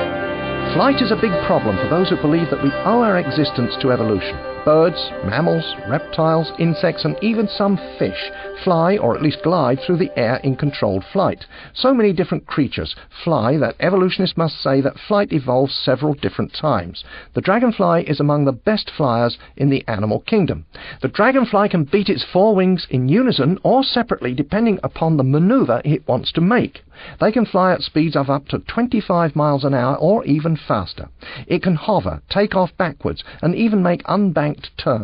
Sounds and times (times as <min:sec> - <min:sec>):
Speech: 0:00.7 - 0:35.0.